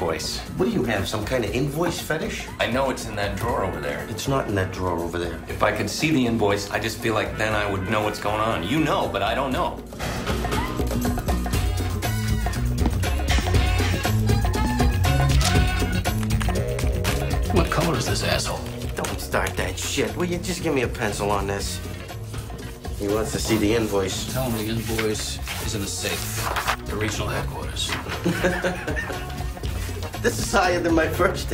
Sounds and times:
Speech: 0:00.0 - 0:09.8, 0:30.2 - 0:31.5
Music: 0:00.0 - 0:31.5.

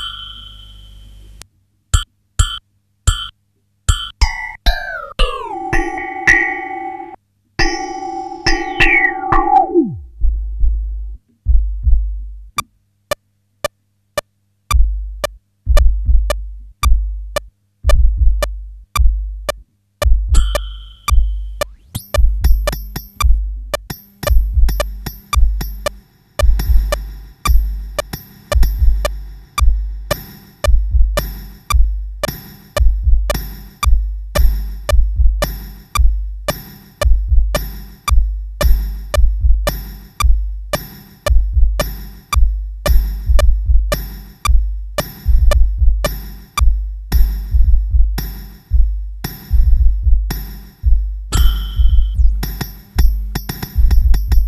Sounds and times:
Sampler: 0:04.1 - 0:10.4, 0:51.3 - 0:52.5.

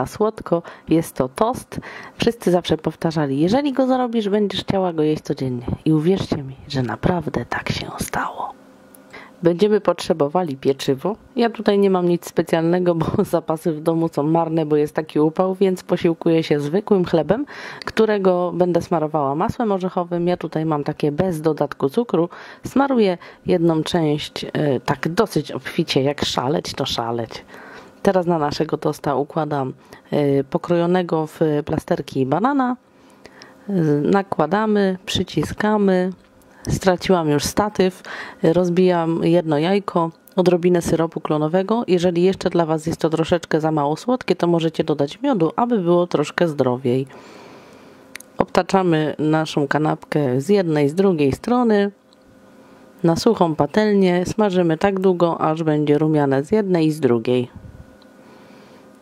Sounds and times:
Speech: 0:00.0 - 0:08.6, 0:09.4 - 0:32.8, 0:33.7 - 0:47.1, 0:48.2 - 0:52.0, 0:53.0 - 0:57.6.

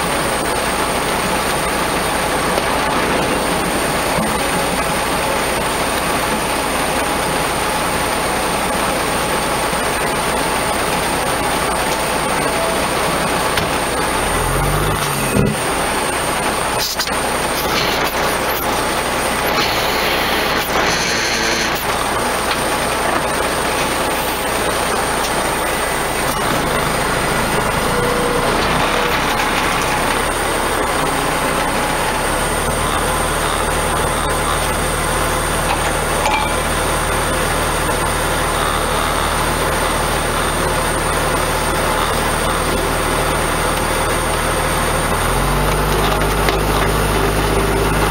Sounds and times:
Truck: 0:00.0 - 0:48.1.

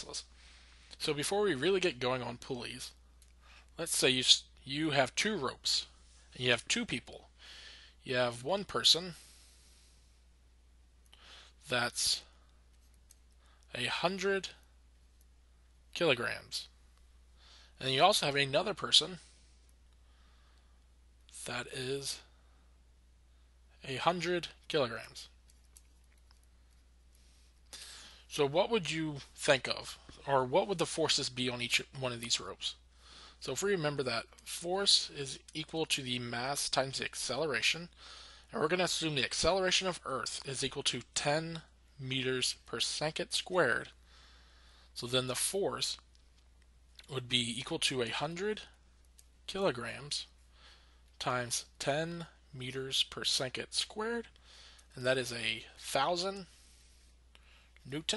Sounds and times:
Speech: 0:00.0 - 0:00.3, 0:01.0 - 0:03.0, 0:03.8 - 0:07.3, 0:08.0 - 0:09.2, 0:11.6 - 0:12.3, 0:13.7 - 0:14.6, 0:16.0 - 0:16.8, 0:17.8 - 0:19.3, 0:21.3 - 0:22.3, 0:23.8 - 0:25.4, 0:28.3 - 0:32.8, 0:33.4 - 0:44.0, 0:45.0 - 0:46.1, 0:47.0 - 0:48.8, 0:49.5 - 0:50.4, 0:51.2 - 0:54.3, 0:54.9 - 0:56.5, 0:57.8 - 0:58.1.

